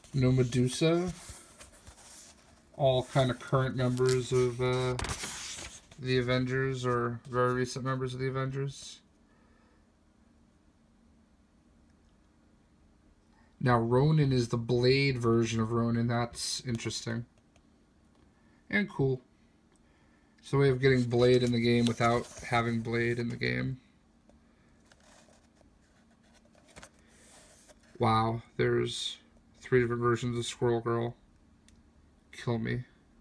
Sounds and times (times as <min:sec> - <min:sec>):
Speech: 0:00.0 - 0:01.3, 0:02.8 - 0:05.2, 0:06.0 - 0:09.1, 0:13.6 - 0:17.3, 0:18.7 - 0:19.3, 0:20.4 - 0:23.9, 0:28.0 - 0:31.2, 0:32.3 - 0:33.0.